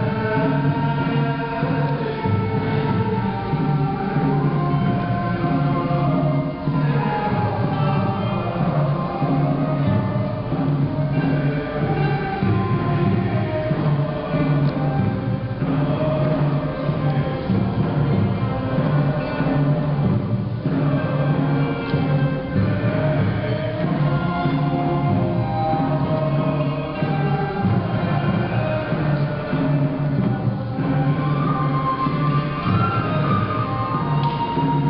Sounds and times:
Music: 0.0 - 34.9.

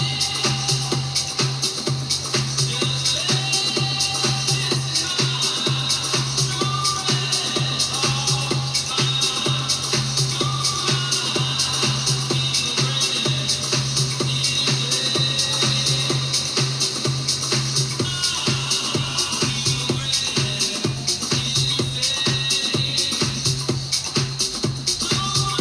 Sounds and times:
Happy music: 0.0 - 25.6.

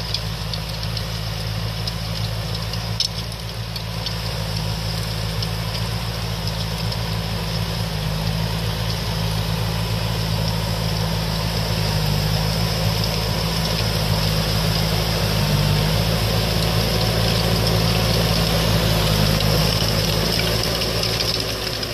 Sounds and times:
Outside, rural or natural: 0.0 - 21.9
Vehicle: 0.0 - 21.9.

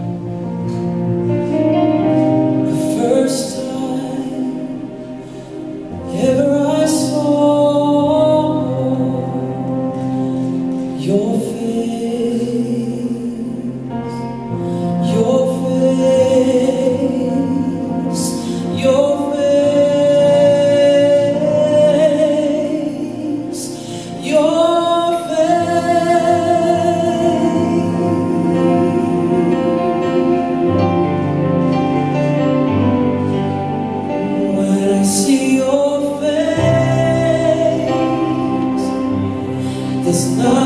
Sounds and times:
Music: 0.0 - 40.6
Male singing: 2.7 - 5.0, 6.0 - 9.8, 10.9 - 14.3, 15.0 - 30.5, 34.4 - 40.6.

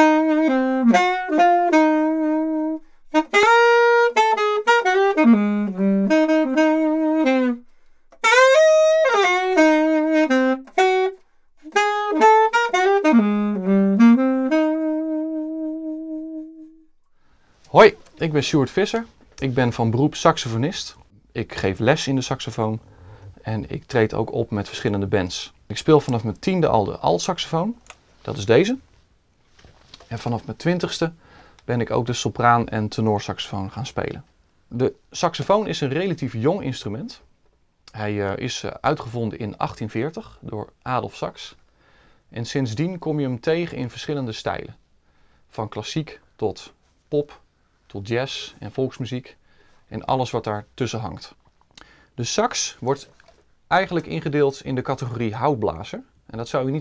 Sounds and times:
Speech: 17.7 - 28.9, 30.0 - 37.3, 37.9 - 41.6, 42.3 - 44.8, 45.5 - 51.4, 52.2 - 53.1, 53.7 - 56.8.

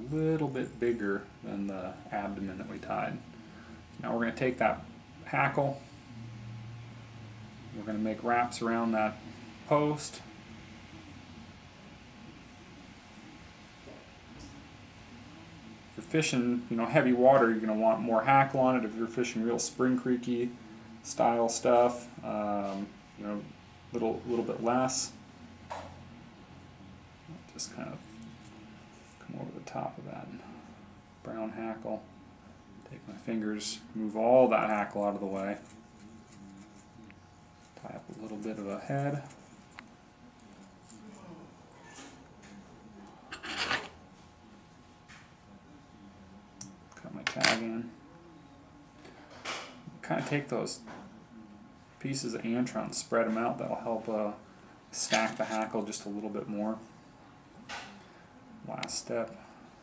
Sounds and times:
Speech: 0.0 - 3.3, 4.0 - 5.9, 7.7 - 11.6, 13.9 - 39.6, 44.2 - 57.1, 57.7 - 59.7.

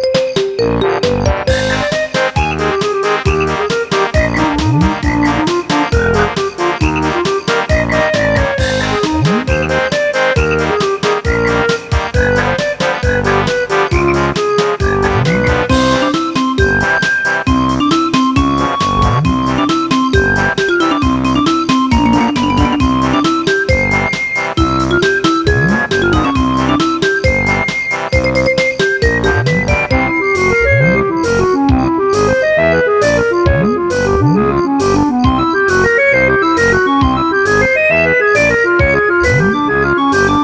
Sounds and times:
Music: 0.0 - 40.4.

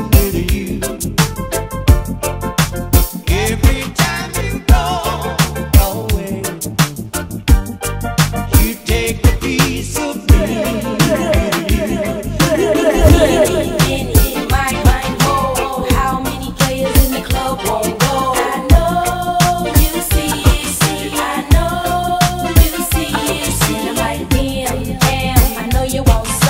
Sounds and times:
Soul music: 0.0 - 26.5.

